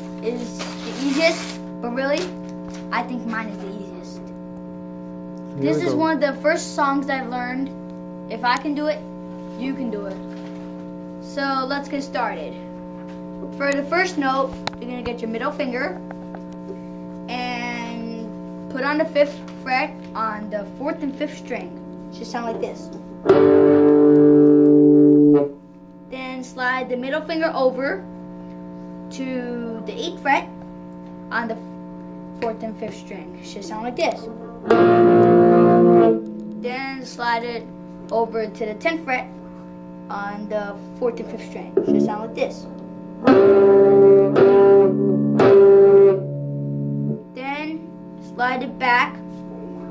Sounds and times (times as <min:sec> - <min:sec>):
Speech: 0:00.2 - 0:04.3, 0:05.6 - 0:09.0, 0:09.6 - 0:10.2, 0:11.3 - 0:12.6, 0:13.6 - 0:16.0, 0:17.3 - 0:23.0, 0:26.1 - 0:28.1, 0:29.1 - 0:30.6, 0:31.3 - 0:31.6, 0:32.4 - 0:34.5, 0:36.6 - 0:39.3, 0:40.1 - 0:42.7, 0:47.4 - 0:49.2.